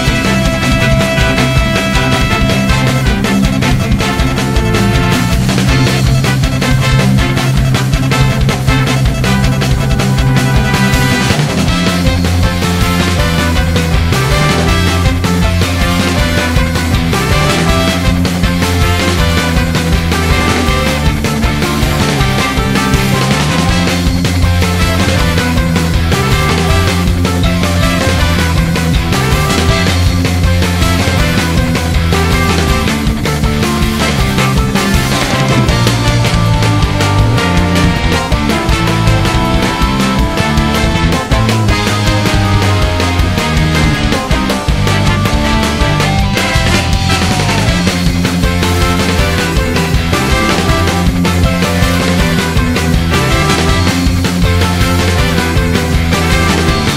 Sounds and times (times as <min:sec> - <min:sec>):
Background music: 0:00.0 - 0:56.9.